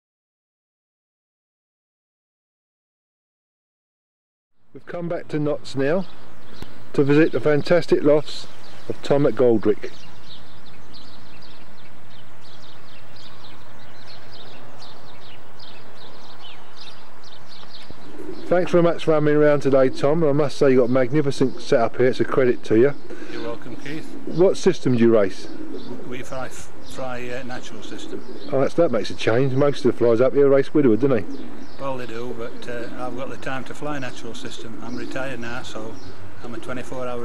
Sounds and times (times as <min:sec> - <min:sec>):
Speech: 0:04.8 - 0:06.1, 0:07.0 - 0:10.0, 0:18.5 - 0:25.5, 0:26.1 - 0:37.2
Coo: 0:17.6 - 0:20.6, 0:22.9 - 0:37.2.